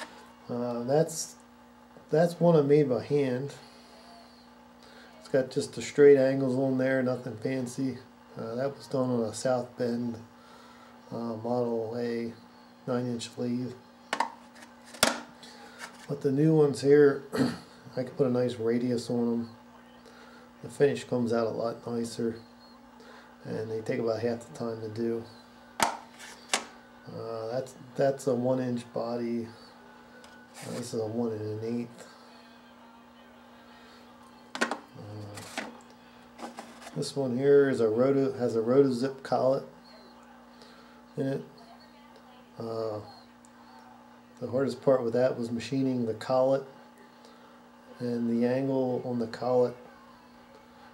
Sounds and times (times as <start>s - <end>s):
Speech: 0.5s - 1.4s, 2.1s - 3.6s, 5.2s - 10.3s, 11.1s - 13.8s, 16.1s - 17.3s, 17.9s - 22.4s, 23.4s - 25.4s, 27.1s - 29.7s, 30.6s - 34.4s, 35.0s - 35.6s, 36.9s - 40.6s, 41.2s - 46.8s, 47.9s - 50.9s.